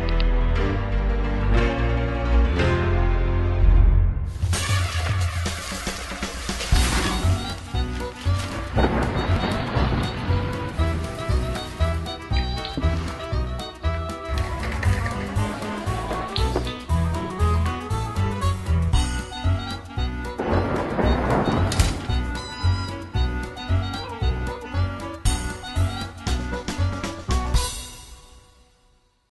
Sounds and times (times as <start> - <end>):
Music: 0.0 - 29.3.